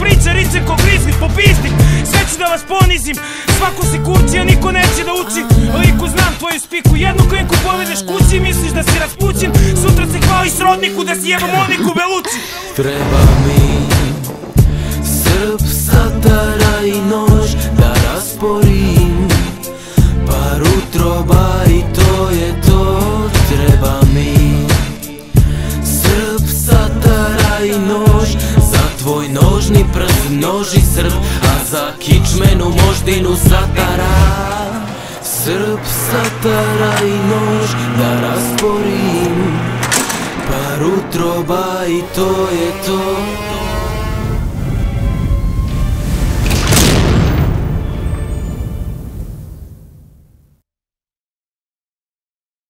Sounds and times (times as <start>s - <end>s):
Music: 0.0s - 49.4s
Boom: 12.9s - 16.9s, 33.9s - 34.9s, 44.6s - 50.4s.